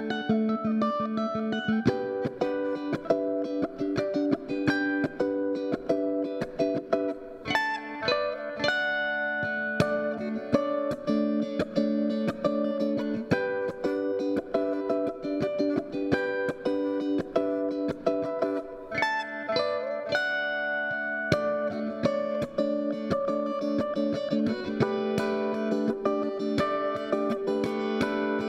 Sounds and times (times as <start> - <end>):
Inside, small room: 0.0 - 28.4
Music: 0.0 - 28.4.